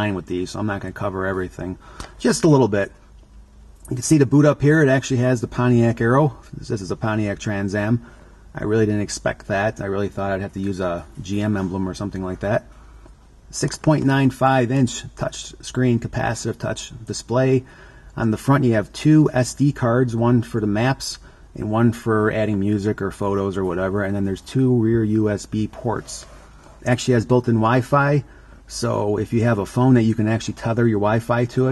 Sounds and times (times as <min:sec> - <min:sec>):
Speech: 0:00.0 - 0:03.0, 0:03.8 - 0:12.7, 0:13.5 - 0:31.7.